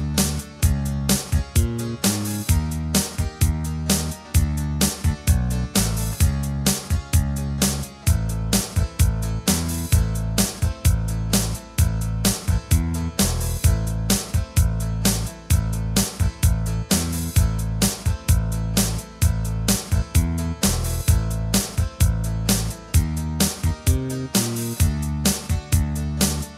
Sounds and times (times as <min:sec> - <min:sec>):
Music: 0:00.0 - 0:26.5.